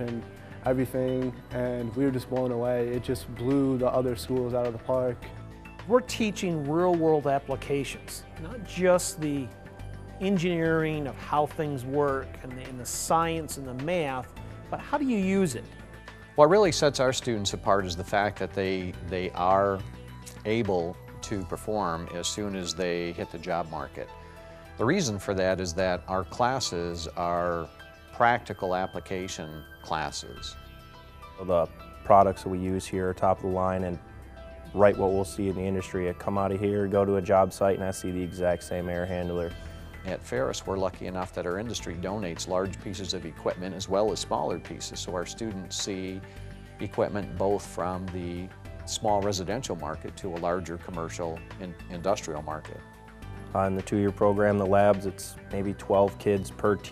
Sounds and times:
Speech: 0:00.0 - 0:05.2, 0:05.9 - 0:09.5, 0:10.2 - 0:14.2, 0:14.8 - 0:15.6, 0:16.4 - 0:24.1, 0:24.8 - 0:30.6, 0:31.4 - 0:34.0, 0:34.8 - 0:39.5, 0:40.1 - 0:46.2, 0:46.8 - 0:52.8, 0:53.5 - 0:56.9
Music: 0:00.0 - 0:56.9.

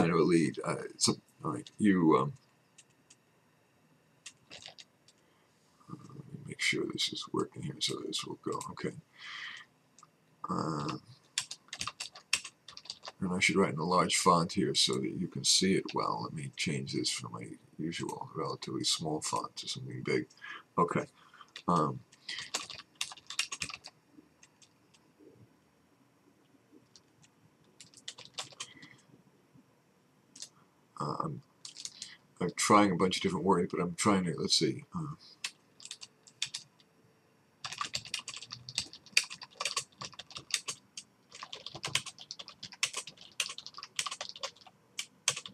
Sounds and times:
Speech: 0:00.0 - 0:02.4, 0:05.9 - 0:09.0, 0:10.4 - 0:11.0, 0:13.2 - 0:22.5, 0:31.0 - 0:35.2
Typing: 0:04.2 - 0:05.2, 0:10.8 - 0:13.2, 0:21.5 - 0:24.7, 0:27.8 - 0:28.7, 0:31.6 - 0:32.1, 0:35.4 - 0:36.7, 0:37.6 - 0:45.5.

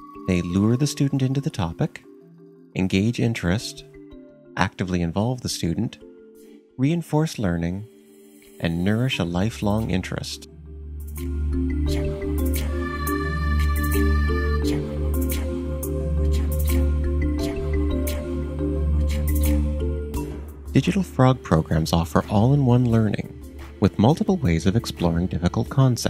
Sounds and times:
Music: 0:00.0 - 0:26.1
Speech: 0:00.3 - 0:02.1, 0:02.8 - 0:03.9, 0:04.6 - 0:06.0, 0:06.8 - 0:07.9, 0:08.6 - 0:10.5, 0:20.8 - 0:26.1.

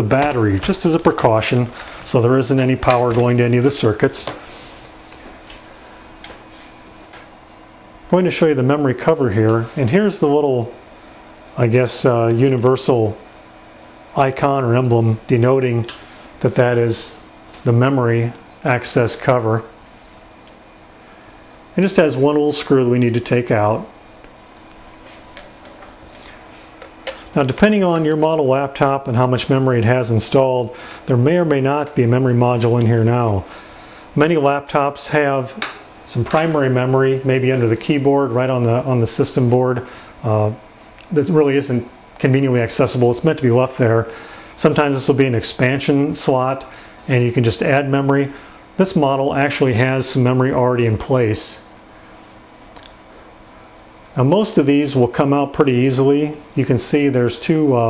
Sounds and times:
Speech: 0:00.0 - 0:04.4, 0:08.1 - 0:10.8, 0:11.6 - 0:13.3, 0:14.1 - 0:19.8, 0:21.8 - 0:24.0, 0:27.3 - 0:33.5, 0:34.2 - 0:51.7, 0:54.1 - 0:57.8
Inside, small room: 0:00.0 - 0:57.8.

